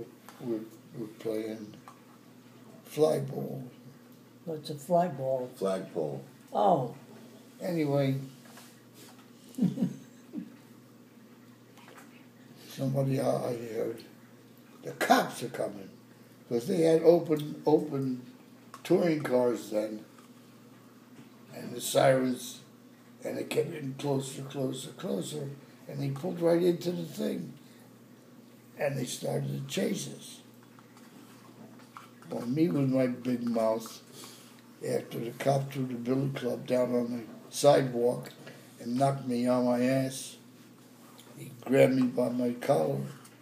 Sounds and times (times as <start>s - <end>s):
Speech: 0.0s - 1.8s, 2.8s - 3.8s, 4.5s - 7.0s, 7.6s - 8.4s, 12.6s - 14.2s, 14.8s - 20.1s, 21.5s - 27.6s, 28.8s - 30.5s, 32.3s - 34.1s, 34.8s - 40.4s, 41.3s - 43.2s.